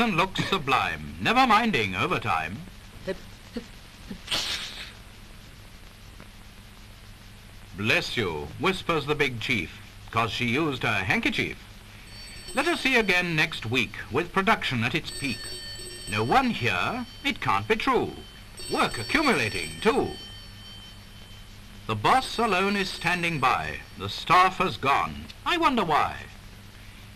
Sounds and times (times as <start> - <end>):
Speech: 0.0 - 3.7, 7.8 - 11.6, 12.6 - 15.4, 16.1 - 20.2, 21.9 - 26.4
Sneeze: 4.3 - 5.0.